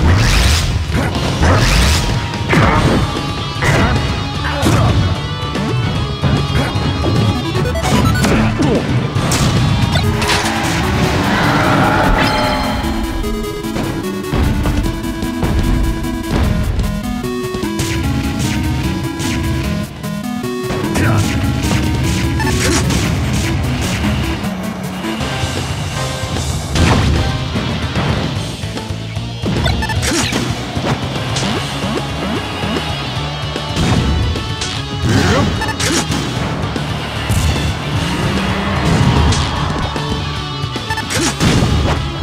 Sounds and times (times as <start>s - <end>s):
Music: 0.0s - 42.2s.